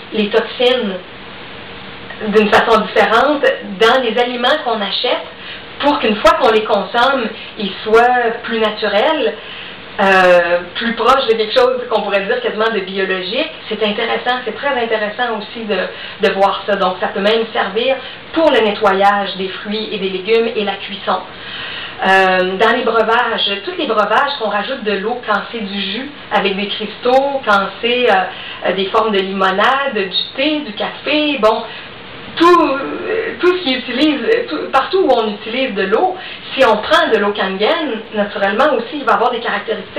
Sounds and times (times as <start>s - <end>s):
Speech: 0.0s - 1.1s, 2.1s - 9.4s, 10.0s - 21.3s, 22.0s - 39.9s.